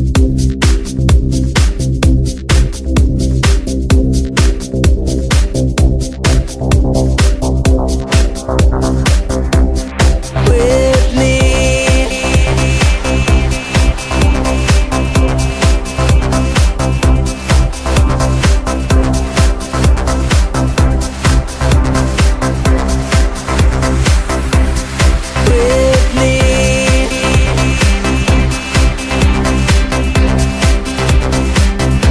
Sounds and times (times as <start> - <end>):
Music: 0.0 - 32.1.